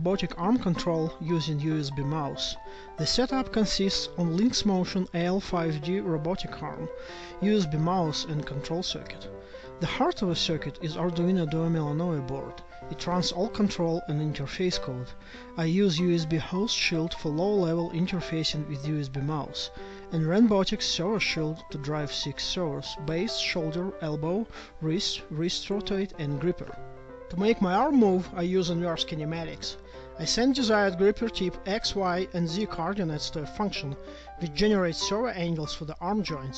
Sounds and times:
Music: 0.0s - 36.5s
Speech: 0.0s - 36.5s.

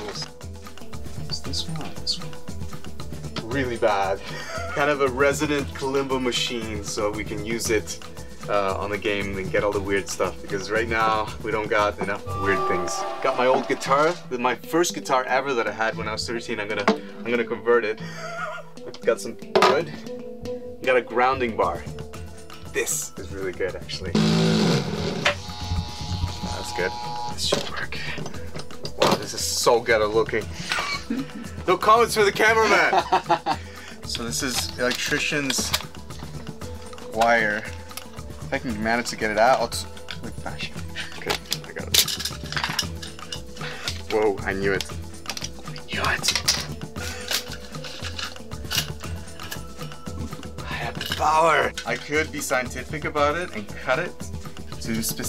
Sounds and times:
Speech: 0.0s - 0.3s, 1.2s - 2.3s, 3.4s - 4.2s, 4.8s - 18.0s, 19.0s - 20.0s, 20.8s - 21.9s, 22.7s - 24.2s, 26.5s - 28.2s, 29.0s - 30.5s, 31.7s - 32.9s, 34.1s - 35.8s, 37.1s - 37.7s, 38.5s - 42.0s, 44.1s - 44.9s, 45.9s - 46.4s, 50.8s - 55.2s
Music: 0.0s - 55.2s.

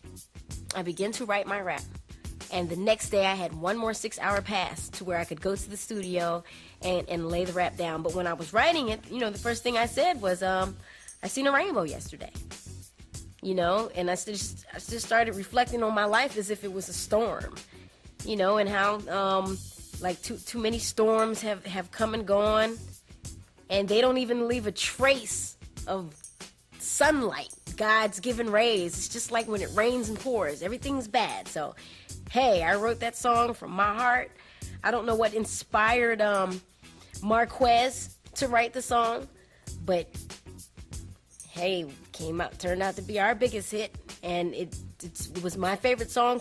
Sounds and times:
Music: 0.0s - 46.4s
Speech: 0.7s - 1.9s, 2.5s - 12.4s, 13.4s - 17.6s, 18.2s - 22.8s, 23.7s - 26.2s, 26.8s - 36.6s, 37.2s - 40.1s, 41.5s - 46.4s.

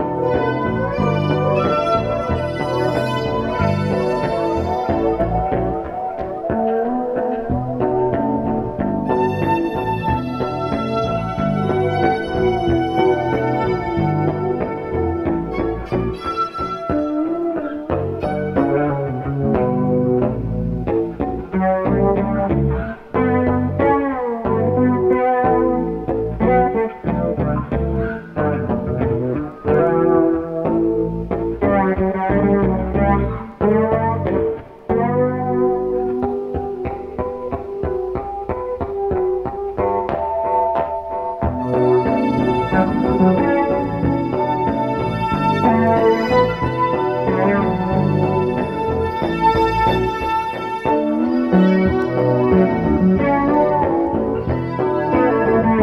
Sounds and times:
Orchestra: 0.0s - 6.4s, 41.3s - 55.8s.

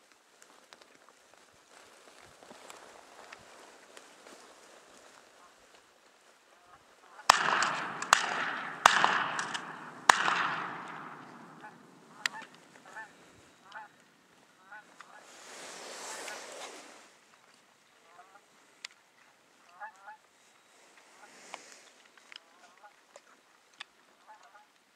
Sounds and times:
Honk: 6.6s - 13.9s, 19.7s - 20.2s, 24.2s - 24.7s.

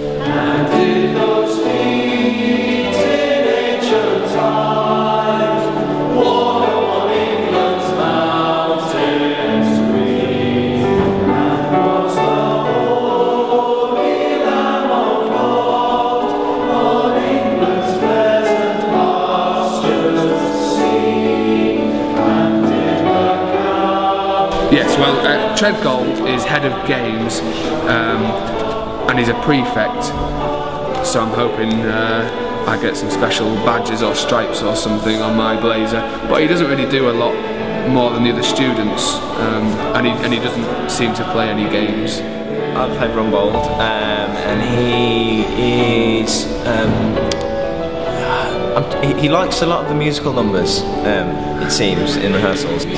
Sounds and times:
Music: 0.0s - 52.9s
Speech: 24.7s - 28.4s, 29.1s - 30.2s, 31.0s - 42.2s, 42.8s - 47.1s, 48.3s - 52.9s.

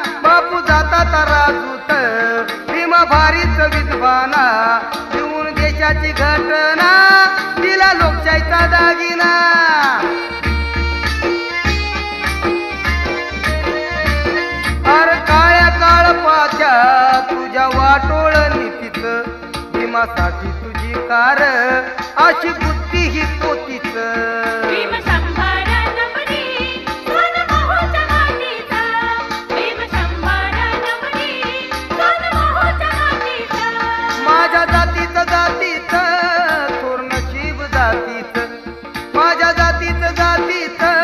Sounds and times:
Carnatic music: 0.0s - 41.0s.

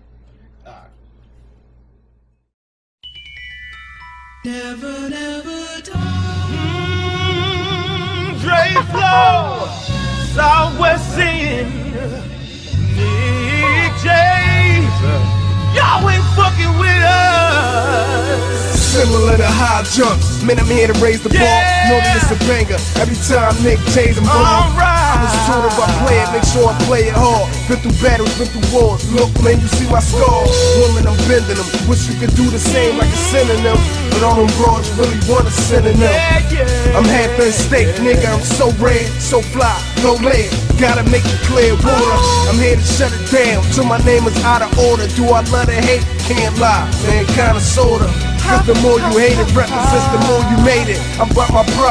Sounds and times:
Music: 0.0s - 51.9s.

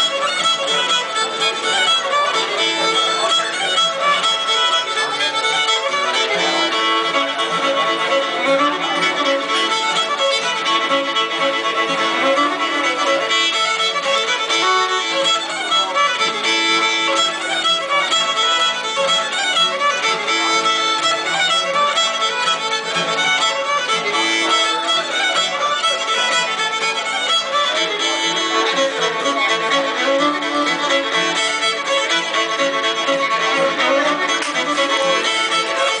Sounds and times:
Speech: 0.0s - 36.0s.

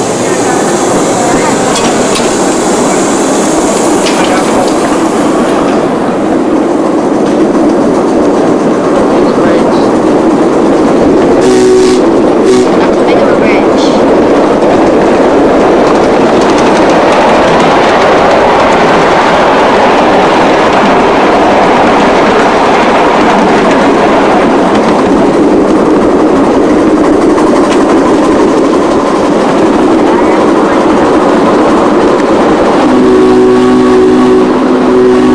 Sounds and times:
Speech: 4.1s - 4.8s, 9.1s - 9.9s, 12.8s - 14.1s.

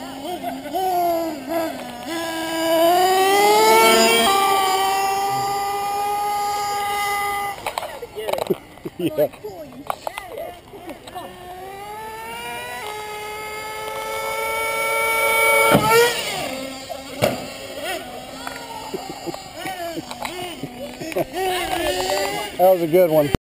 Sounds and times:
Car: 0.0s - 23.4s.

